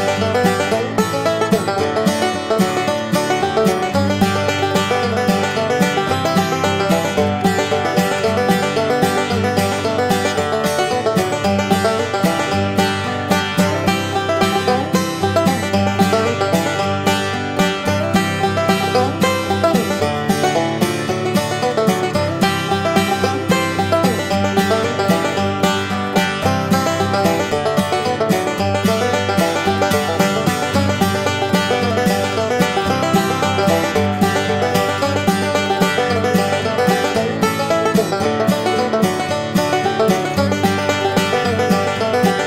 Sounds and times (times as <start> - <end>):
Music: 0.0 - 42.4.